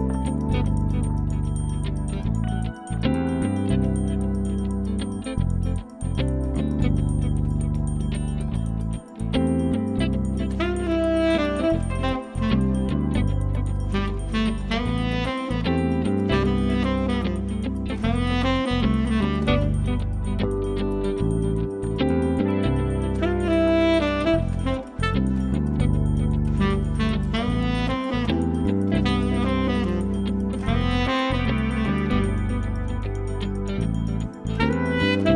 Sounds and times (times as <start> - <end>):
Music: 0.0 - 35.3.